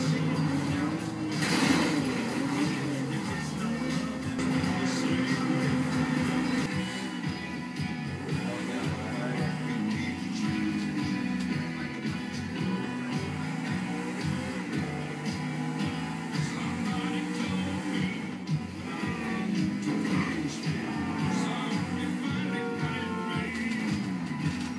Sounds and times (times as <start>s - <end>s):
Television: 0.0s - 24.7s.